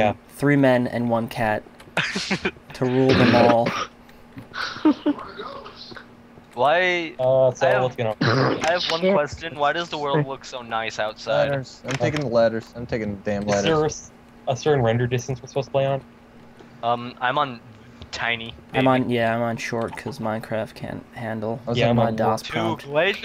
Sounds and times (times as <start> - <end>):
Speech: 2.7 - 3.9, 6.6 - 16.0, 18.2 - 23.2.